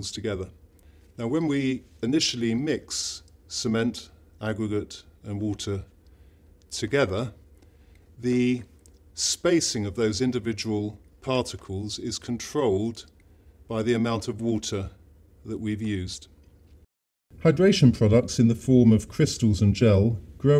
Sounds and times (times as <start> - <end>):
Speech: 0.0 - 0.6, 1.2 - 6.0, 6.7 - 7.4, 8.2 - 16.4, 17.4 - 20.6.